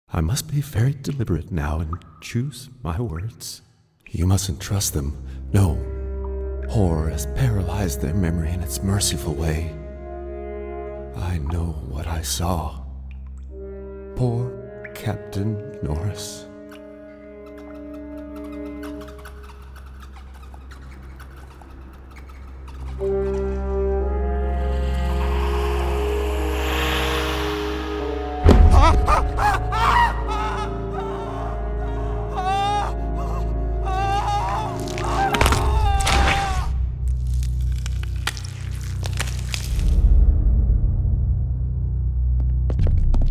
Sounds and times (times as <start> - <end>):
Speech: 0.1 - 5.9, 6.7 - 9.8, 11.1 - 12.9, 14.2 - 16.5
Music: 0.2 - 43.3.